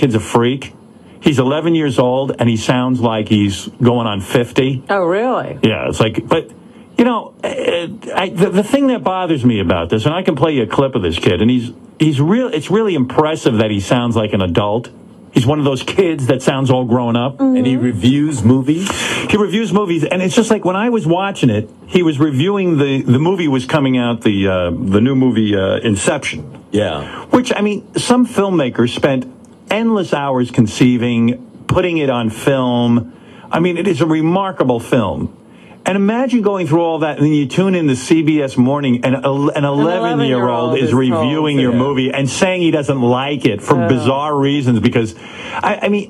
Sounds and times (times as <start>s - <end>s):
Speech: 0.0s - 46.1s.